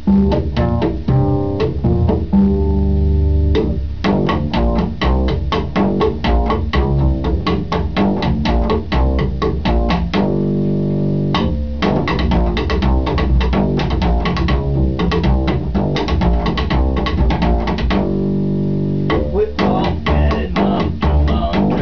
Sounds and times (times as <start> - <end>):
Music: 0.0 - 21.8.